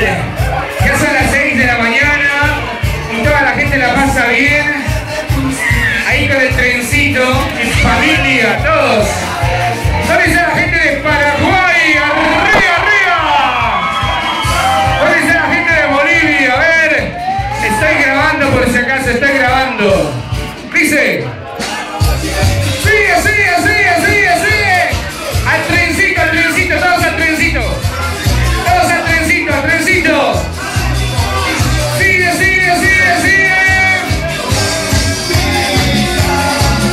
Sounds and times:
Speech: 0.0 - 4.8, 6.0 - 9.2, 10.0 - 13.4, 15.0 - 30.4
Disco: 0.0 - 36.9.

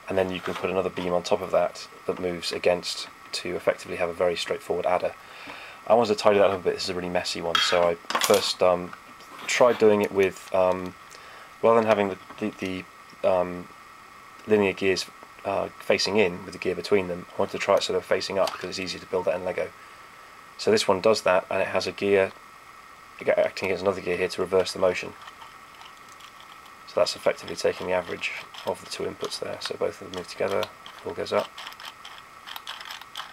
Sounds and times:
Speech: 0.1 - 5.2, 5.9 - 11.0, 11.6 - 13.7, 14.4 - 19.7, 20.6 - 22.4, 23.2 - 25.2, 26.9 - 31.5.

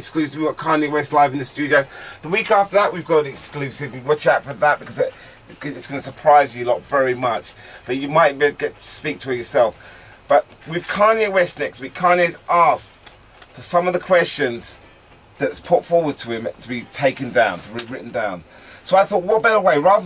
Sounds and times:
Speech: 0.0 - 14.8, 15.4 - 20.0.

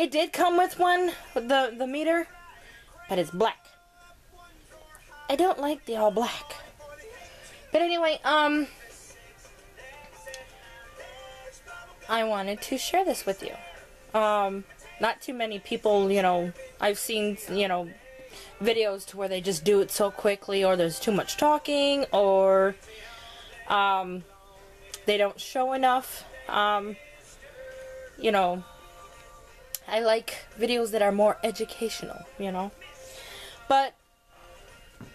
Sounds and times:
Speech: 0.0 - 2.3, 3.1 - 3.7, 5.3 - 6.6, 7.8 - 8.7, 12.1 - 13.6, 14.2 - 17.9, 18.6 - 22.8, 23.7 - 24.2, 25.0 - 27.0, 28.2 - 28.6, 29.8 - 32.7, 33.7 - 33.9
Music: 0.0 - 35.1.

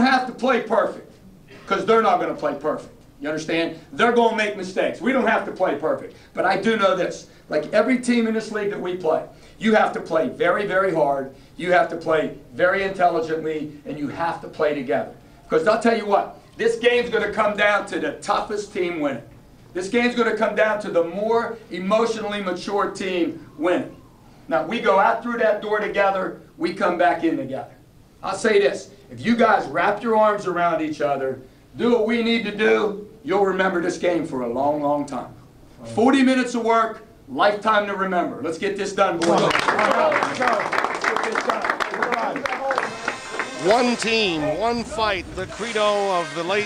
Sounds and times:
Male speech, man speaking: 0.0 - 23.9, 24.5 - 42.9, 43.5 - 46.6
Narration, monologue: 0.0 - 46.6.

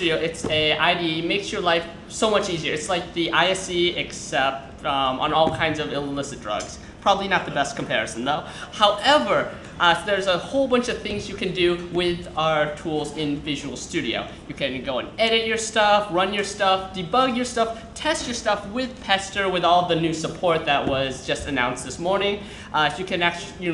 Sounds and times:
Speech: 0.0 - 23.7.

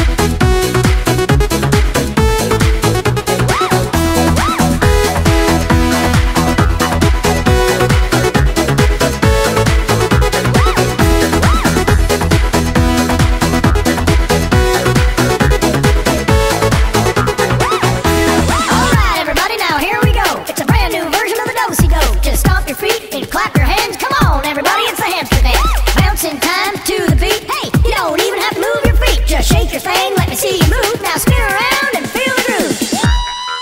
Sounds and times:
Dance music: 0.0 - 33.6.

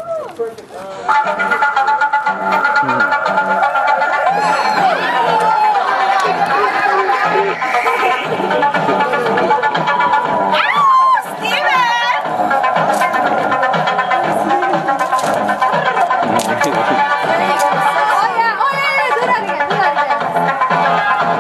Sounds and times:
Music: 0.8 - 21.4.

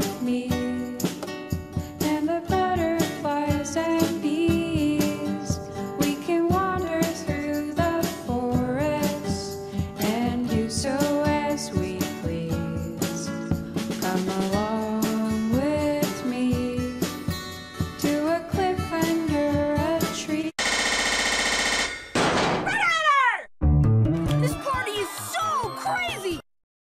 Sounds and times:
Music: 0.0 - 20.6, 23.6 - 26.4
Speech: 24.4 - 26.4.

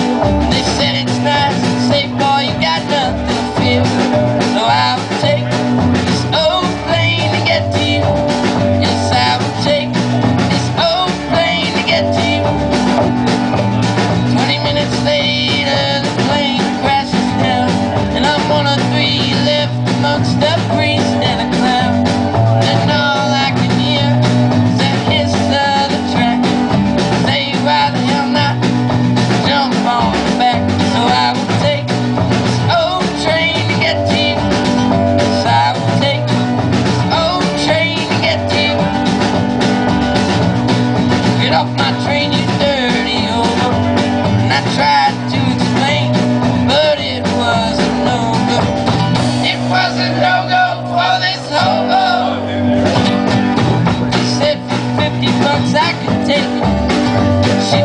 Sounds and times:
Music: 0.0 - 57.8.

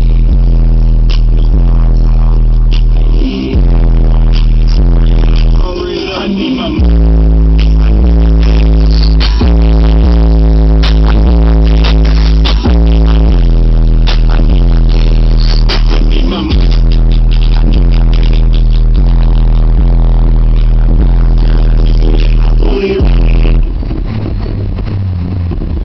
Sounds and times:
Car: 0.0 - 25.8
Music: 0.0 - 25.8.

